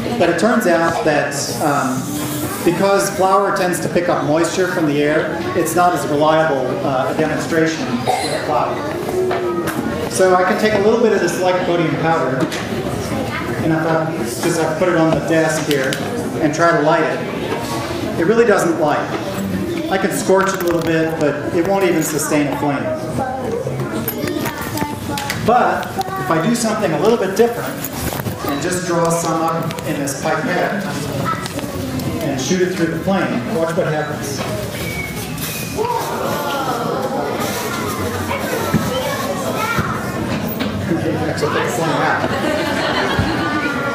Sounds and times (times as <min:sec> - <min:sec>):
Speech: 0:00.0 - 0:09.0.